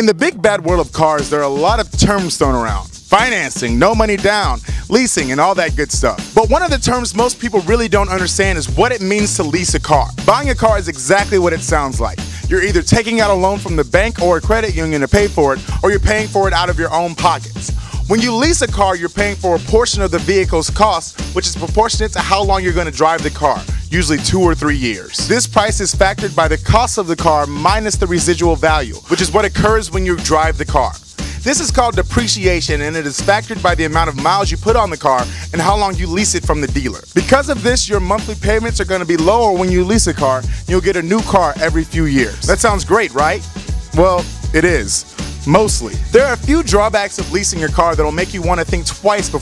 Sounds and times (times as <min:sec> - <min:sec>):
Speech: 0:00.0 - 0:43.4, 0:44.0 - 0:49.4
Music: 0:00.0 - 0:49.4.